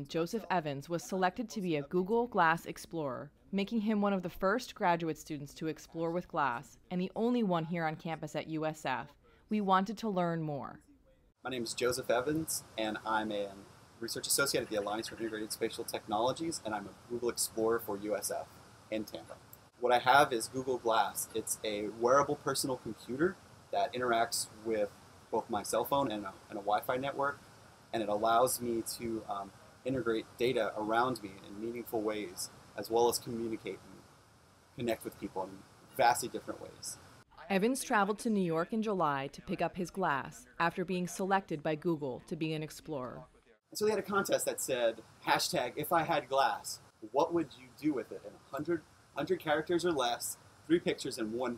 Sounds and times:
Speech: 0.0 - 10.9, 11.5 - 27.4, 28.0 - 33.9, 34.8 - 51.5.

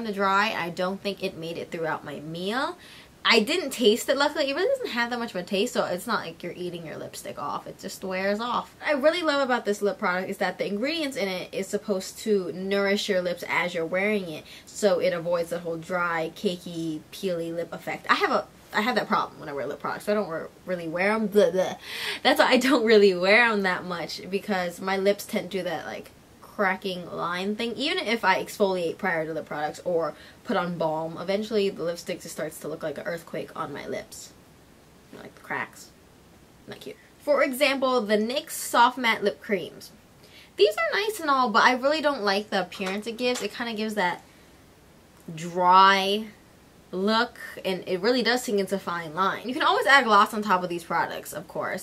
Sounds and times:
Speech: 0.0 - 34.4, 35.1 - 35.9, 36.7 - 40.0, 40.6 - 44.2, 45.3 - 51.8
Inside, small room: 0.0 - 51.8.

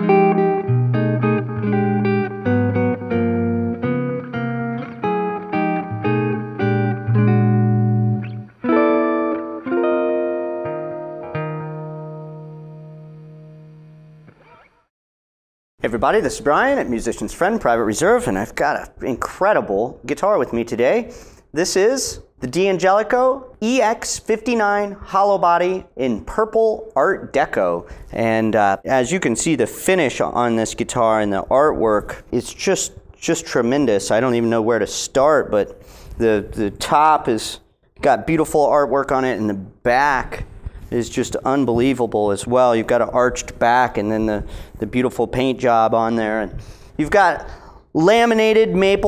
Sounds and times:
Effects unit: 0.0 - 14.9
Electric guitar: 0.0 - 14.9.

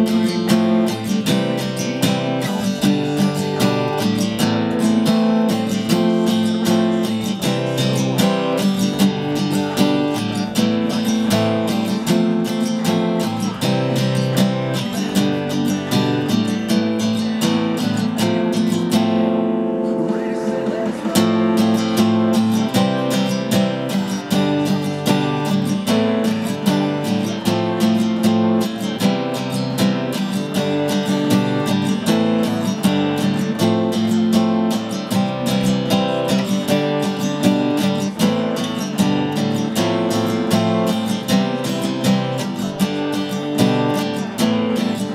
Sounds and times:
Acoustic guitar: 0.0 - 45.1
Strum: 0.0 - 45.1.

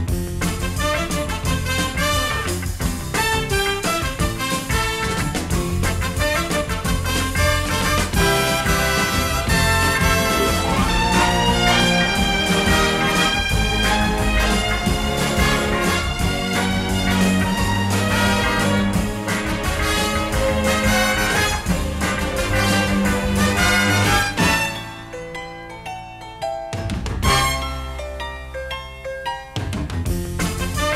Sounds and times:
Orchestra: 0.1 - 25.9, 26.5 - 28.8, 29.6 - 30.9.

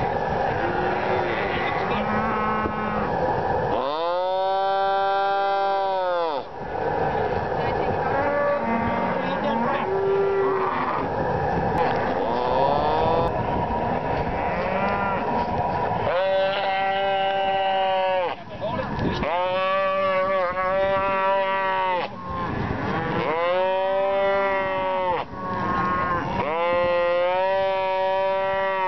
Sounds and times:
Moo: 0.5 - 3.1, 3.8 - 6.5, 8.1 - 11.1, 11.8 - 13.3, 14.4 - 15.4, 16.1 - 18.4, 19.2 - 28.8.

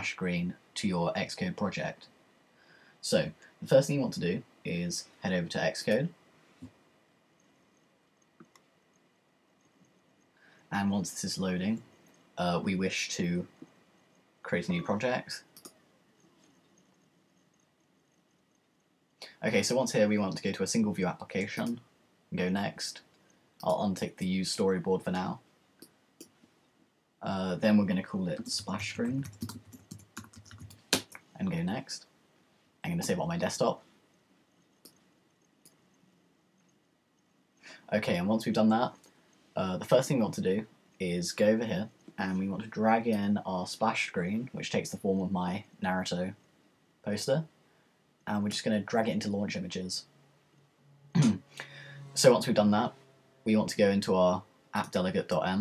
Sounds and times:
Speech: 0.0 - 2.1, 3.0 - 6.2, 10.7 - 13.6, 14.4 - 15.5, 19.2 - 25.4, 27.2 - 29.4, 31.1 - 32.1, 32.8 - 33.8, 37.7 - 39.0, 39.6 - 46.4, 47.0 - 47.5, 48.3 - 50.1, 51.2 - 51.5, 52.1 - 55.6.

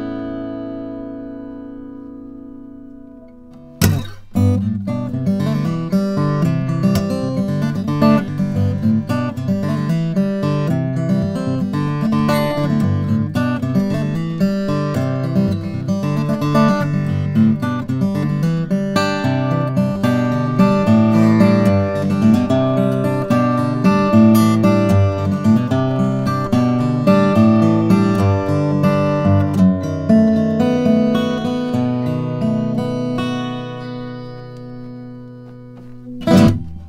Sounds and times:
Acoustic guitar: 0.0 - 36.8
Strum: 0.0 - 36.8.

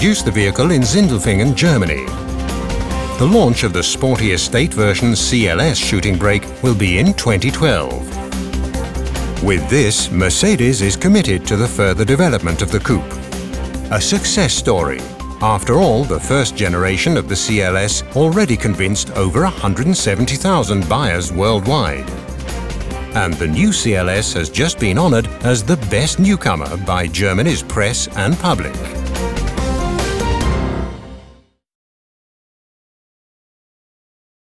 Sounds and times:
Speech: 0.0 - 2.1, 3.2 - 8.1, 9.4 - 13.2, 13.9 - 22.1, 23.1 - 29.0
Music: 0.0 - 31.6.

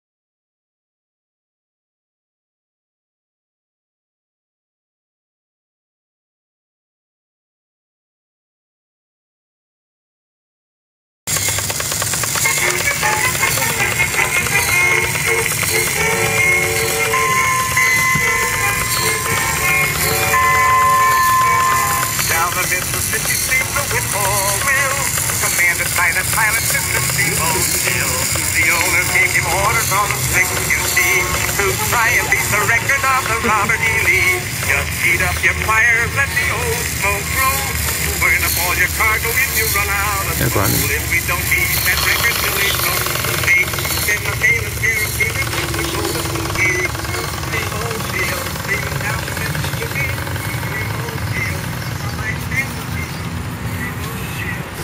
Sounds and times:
Music: 12.1 - 51.6.

